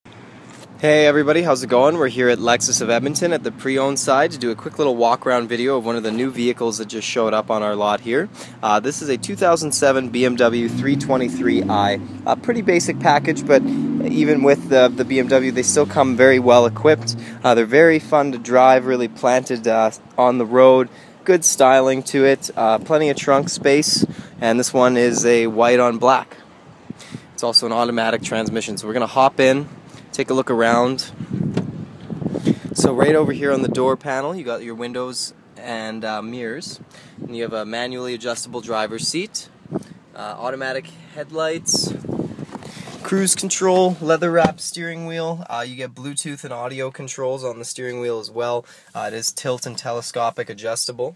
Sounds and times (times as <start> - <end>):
Speech: 0.8 - 26.4, 27.4 - 31.2, 32.8 - 39.5, 40.2 - 42.0, 43.0 - 51.1.